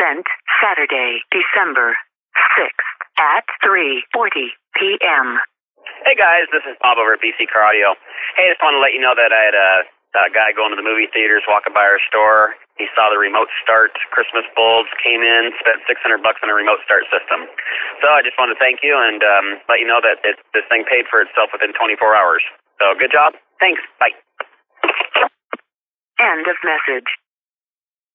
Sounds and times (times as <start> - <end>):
Speech: 0.0 - 25.3, 26.2 - 27.3.